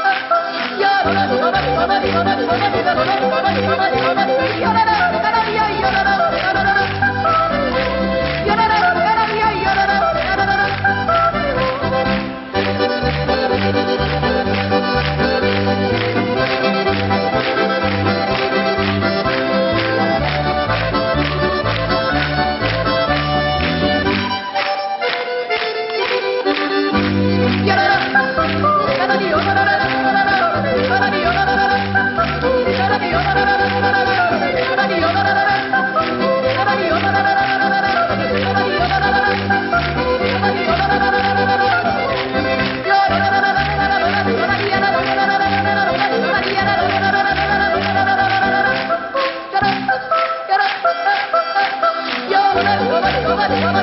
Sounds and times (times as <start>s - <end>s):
Applause: 0.0s - 53.8s
Music: 0.0s - 53.8s.